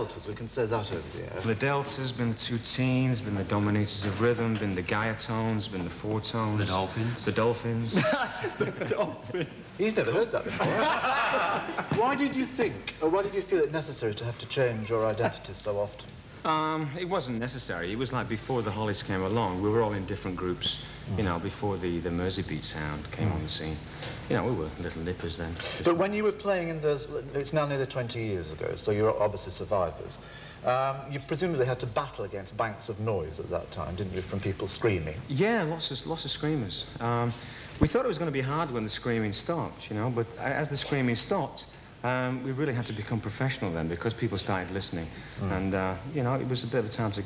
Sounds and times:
Speech: 0:00.0 - 0:10.8, 0:11.8 - 0:47.2.

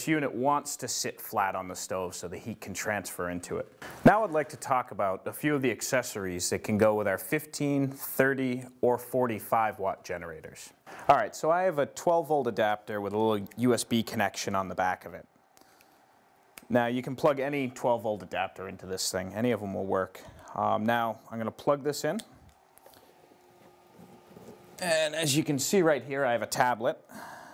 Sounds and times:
Speech: 0:00.0 - 0:15.3, 0:16.7 - 0:22.3, 0:24.8 - 0:27.0.

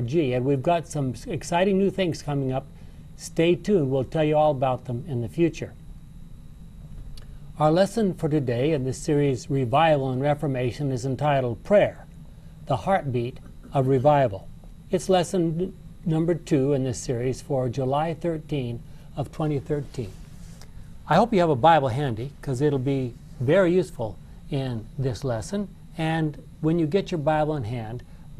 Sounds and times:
Speech: 0:00.0 - 0:05.8, 0:07.6 - 0:12.1, 0:12.7 - 0:20.2, 0:21.1 - 0:28.1.

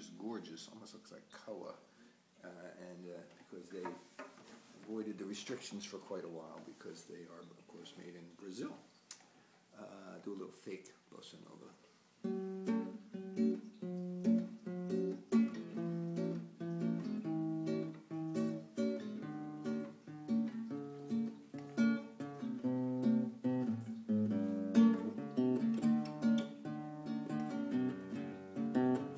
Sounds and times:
Speech: 0:00.0 - 0:04.0, 0:04.8 - 0:08.9, 0:09.7 - 0:11.8
Acoustic guitar: 0:11.9 - 0:29.1.

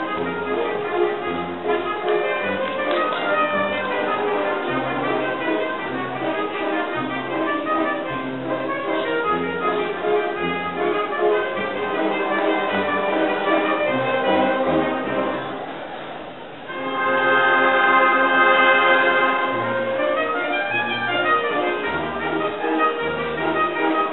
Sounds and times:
Trumpet: 0:00.0 - 0:15.7, 0:16.7 - 0:24.1
Inside, large room or hall: 0:00.0 - 0:24.1.

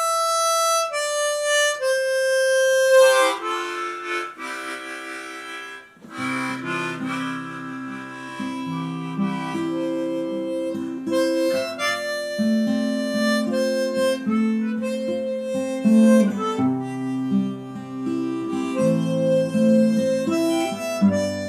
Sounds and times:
Acoustic guitar: 0:00.0 - 0:21.4.

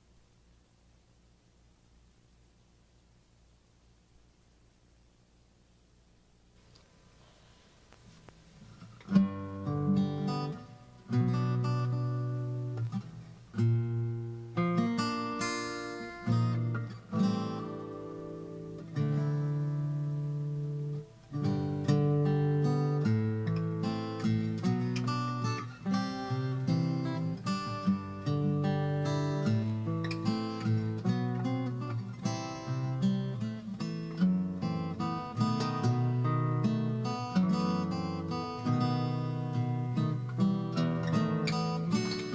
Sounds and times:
Acoustic guitar: 0:06.6 - 0:42.3
Electric guitar: 0:07.9 - 0:42.3.

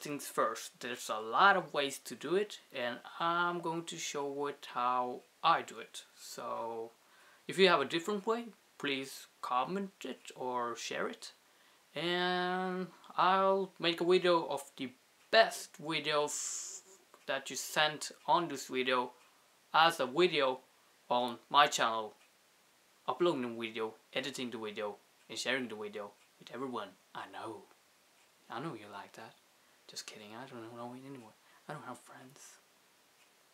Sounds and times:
Speech: 0:00.0 - 0:11.4, 0:12.0 - 0:19.2, 0:19.8 - 0:22.2, 0:23.1 - 0:27.7, 0:28.5 - 0:32.6.

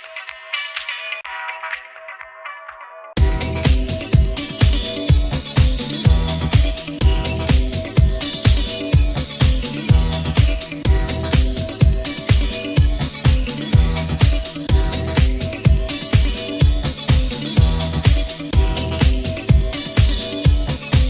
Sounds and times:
Electronic music: 0:00.0 - 0:21.1.

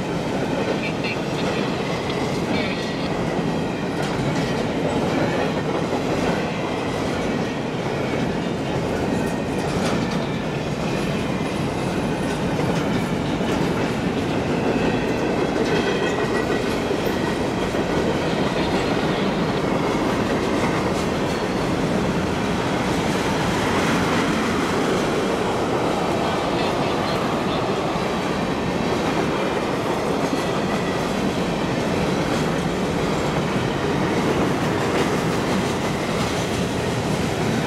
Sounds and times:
Outside, urban or manmade: 0:00.0 - 0:37.6
Railroad car, train wagon: 0:00.0 - 0:37.6
Train: 0:00.0 - 0:37.6.

